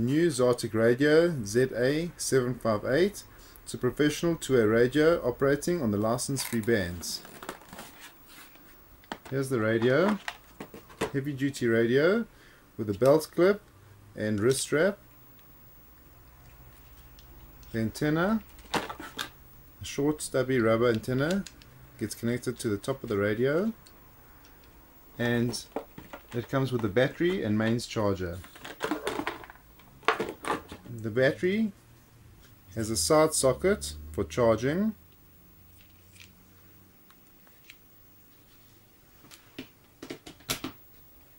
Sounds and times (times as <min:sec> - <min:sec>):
Speech: 0:00.0 - 0:07.3, 0:09.3 - 0:10.3, 0:11.0 - 0:13.6, 0:14.2 - 0:15.0, 0:17.7 - 0:18.5, 0:19.8 - 0:23.8, 0:25.2 - 0:28.5, 0:30.8 - 0:31.8, 0:32.7 - 0:35.0.